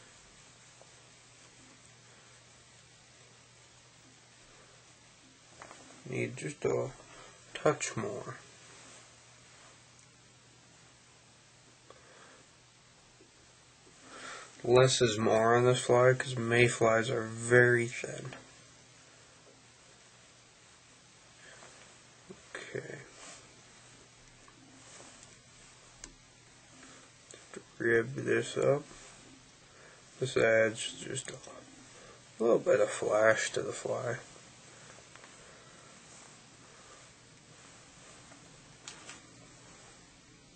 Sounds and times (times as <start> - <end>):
Speech: 6.0 - 8.4, 14.6 - 18.4, 22.5 - 23.2, 27.5 - 29.0, 30.2 - 31.7, 32.4 - 34.3.